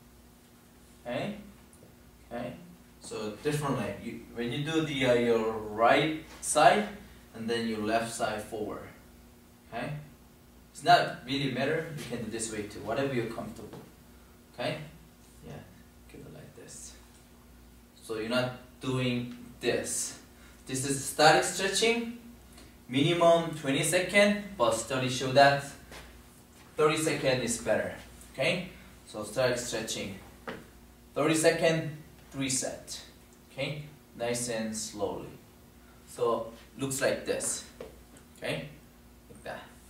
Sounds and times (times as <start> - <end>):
Speech: 1.0 - 1.5, 2.3 - 9.0, 9.7 - 10.1, 10.8 - 13.9, 14.6 - 17.1, 18.0 - 22.2, 22.9 - 25.8, 26.8 - 30.3, 31.2 - 35.4, 36.1 - 37.8, 38.4 - 39.8.